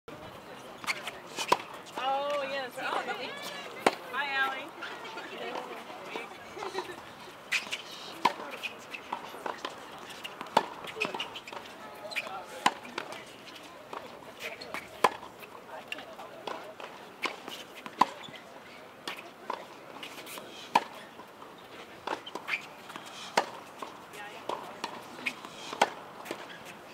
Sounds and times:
Speech: 0.1s - 6.8s, 11.0s - 17.1s.

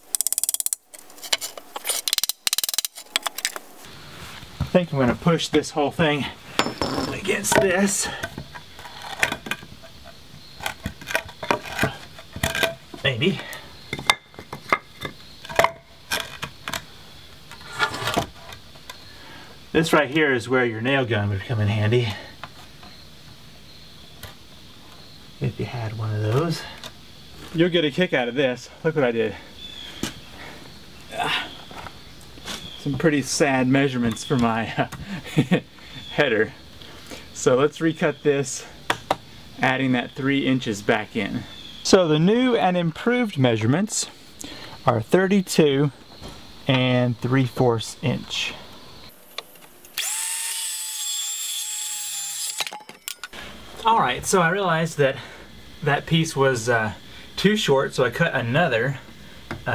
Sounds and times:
Speech: 4.7s - 6.4s, 7.1s - 8.2s, 13.0s - 13.6s, 19.8s - 22.3s, 25.4s - 26.8s, 27.5s - 29.5s, 32.8s - 34.9s, 36.1s - 36.6s, 37.4s - 38.8s, 39.6s - 44.2s, 44.9s - 46.0s, 46.7s - 48.6s, 53.8s - 59.1s
Wood: 6.6s - 9.9s.

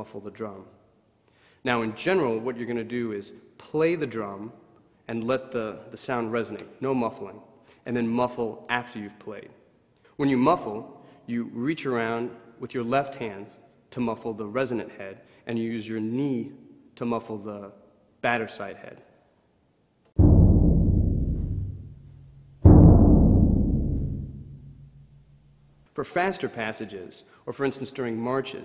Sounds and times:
Speech: 0.0s - 0.8s, 1.6s - 9.6s, 10.2s - 19.2s, 25.9s - 28.6s
Bass drum: 20.2s - 25.4s.

